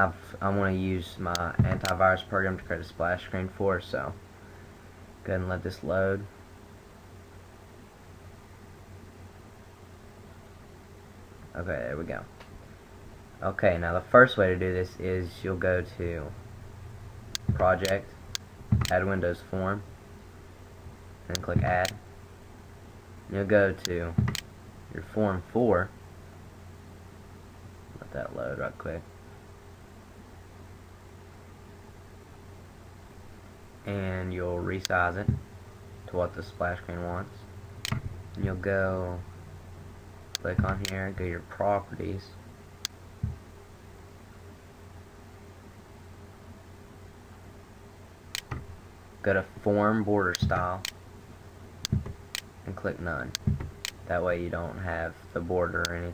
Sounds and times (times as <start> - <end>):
Speech: 0.0 - 4.2, 5.2 - 6.3, 11.5 - 12.3, 13.4 - 16.4, 17.5 - 18.1, 18.9 - 19.9, 21.3 - 22.0, 23.3 - 24.2, 24.9 - 26.0, 28.0 - 29.1, 33.8 - 35.4, 36.1 - 37.5, 38.4 - 39.3, 40.4 - 42.4, 49.2 - 50.9, 52.7 - 53.4, 54.1 - 56.1.